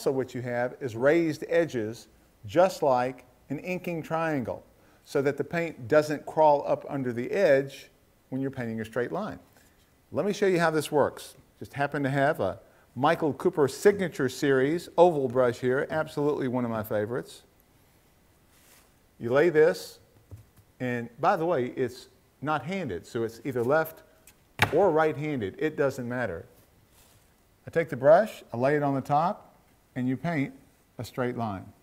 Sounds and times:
Speech: 0.0s - 9.5s, 10.1s - 17.5s, 19.2s - 20.1s, 20.8s - 26.6s, 27.6s - 31.8s.

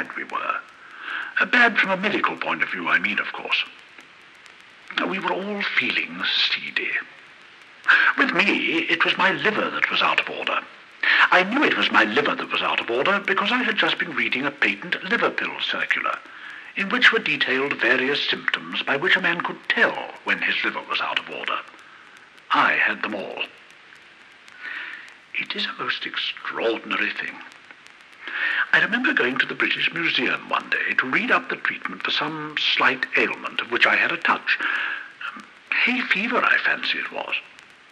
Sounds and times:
Speech: 0.0s - 3.8s, 4.9s - 7.2s, 7.9s - 21.8s, 22.5s - 23.6s, 24.6s - 27.6s, 28.3s - 37.5s.

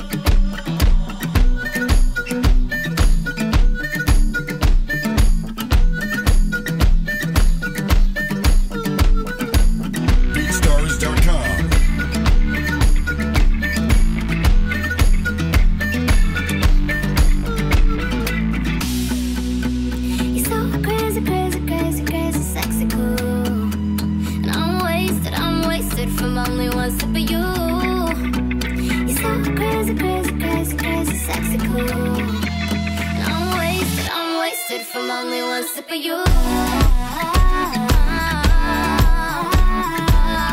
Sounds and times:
Country: 0.0s - 35.6s, 36.3s - 40.5s
Speech: 10.4s - 11.8s.

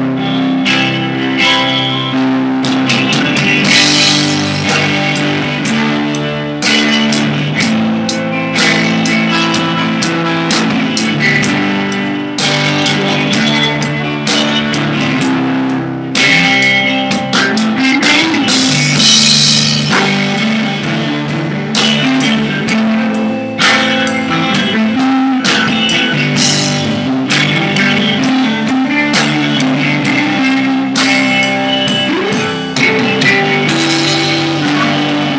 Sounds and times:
Drum kit: 0.0s - 35.3s
Drum: 2.4s - 35.3s.

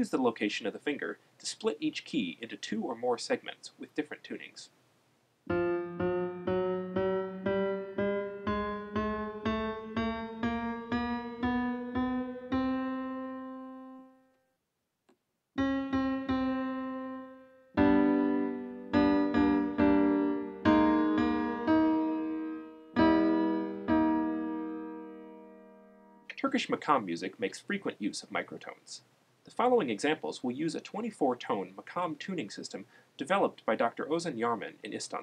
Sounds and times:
Speech: 0.0s - 4.8s, 26.3s - 35.2s
Music: 5.5s - 14.5s, 15.6s - 26.3s.

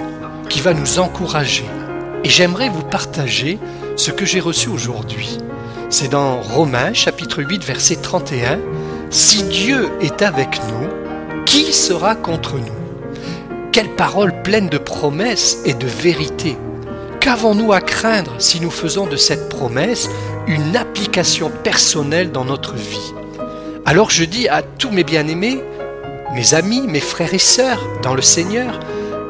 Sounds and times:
Speech: 0.0s - 12.8s, 13.7s - 16.6s, 17.2s - 23.2s, 23.9s - 25.6s, 26.3s - 28.9s
Music: 0.0s - 29.3s.

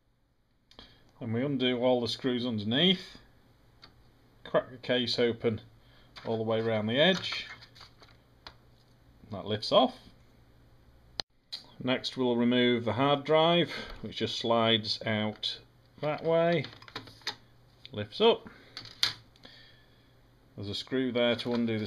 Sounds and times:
Speech: 1.2s - 3.3s, 4.4s - 7.6s, 9.3s - 10.1s, 11.8s - 16.8s, 17.9s - 18.5s, 20.6s - 21.8s.

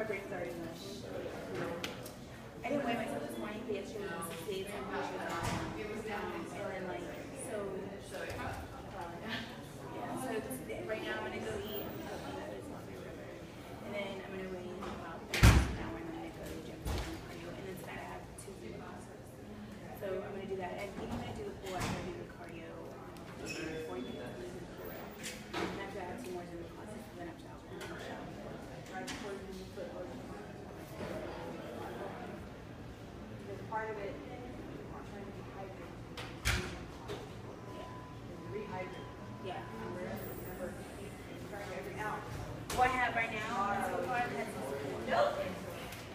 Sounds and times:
Inside, large room or hall: 0.0s - 46.1s.

